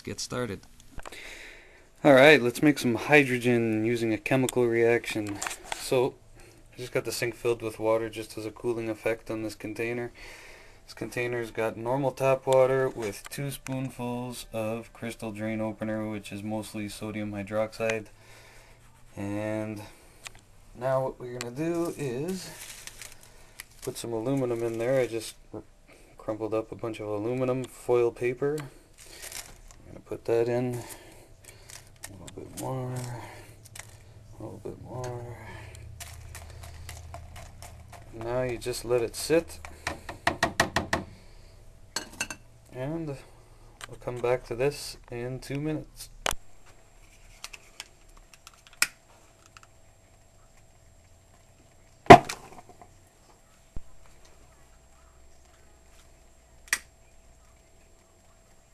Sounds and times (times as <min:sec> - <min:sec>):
Speech: 0:00.0 - 0:00.7, 0:02.0 - 0:06.2, 0:06.8 - 0:10.2, 0:10.9 - 0:18.1, 0:19.2 - 0:19.9, 0:20.8 - 0:22.6, 0:23.9 - 0:28.8, 0:32.1 - 0:33.5, 0:34.4 - 0:35.8, 0:38.1 - 0:39.6, 0:42.7 - 0:43.3, 0:43.9 - 0:46.2
Inside, small room: 0:00.0 - 0:58.7.